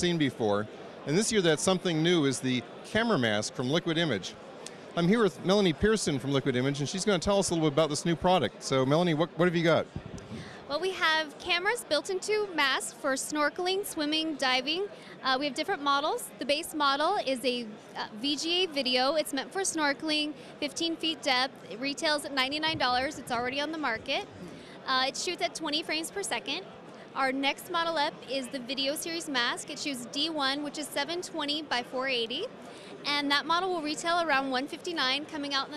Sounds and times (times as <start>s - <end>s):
Speech: 10.7s - 24.3s, 24.9s - 26.6s, 27.2s - 35.7s.